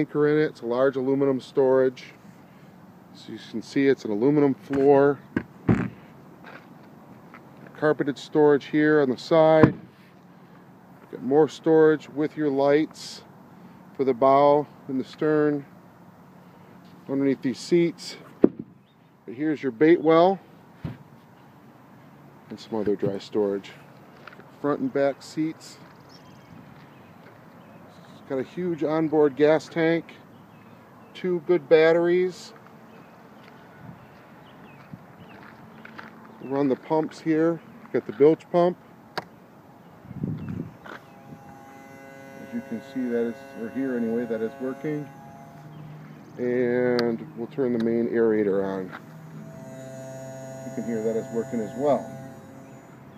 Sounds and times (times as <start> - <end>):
Speech: 0.0 - 2.2, 3.2 - 5.2, 7.7 - 9.7, 11.1 - 13.3, 14.0 - 15.7, 17.1 - 18.3, 19.3 - 20.4, 22.5 - 23.8, 24.6 - 25.8, 28.0 - 30.2, 31.2 - 32.6, 36.4 - 38.8, 42.5 - 45.1, 46.4 - 49.0, 50.8 - 52.1.